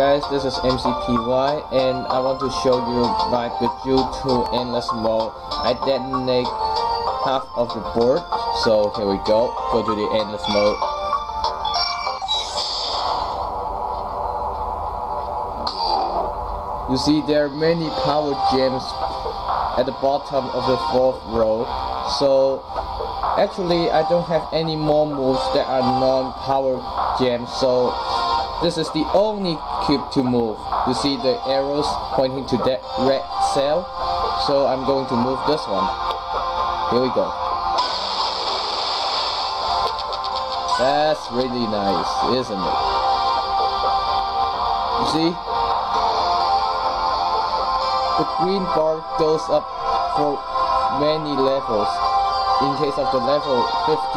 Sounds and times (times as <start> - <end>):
Speech: 0.0 - 6.5, 7.2 - 10.8, 16.9 - 19.0, 19.8 - 22.6, 23.4 - 28.0, 28.6 - 35.9, 36.9 - 37.4, 40.8 - 42.8, 45.0 - 45.4, 48.2 - 52.0, 52.6 - 54.1
Music: 0.0 - 54.1.